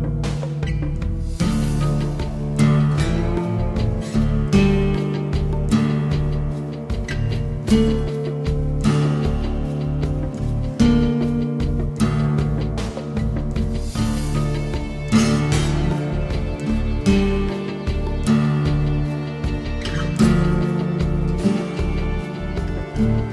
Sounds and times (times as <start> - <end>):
Acoustic guitar: 0.0 - 23.3
Strum: 0.0 - 23.3.